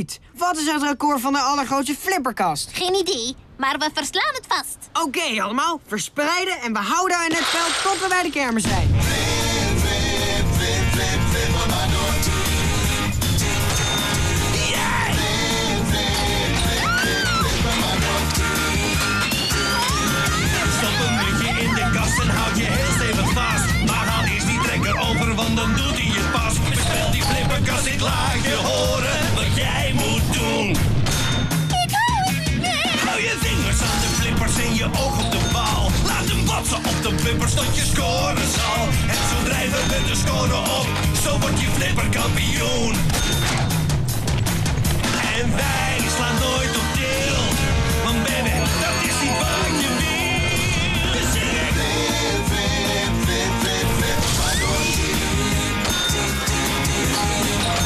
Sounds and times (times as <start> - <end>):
Music: 8.6 - 57.8.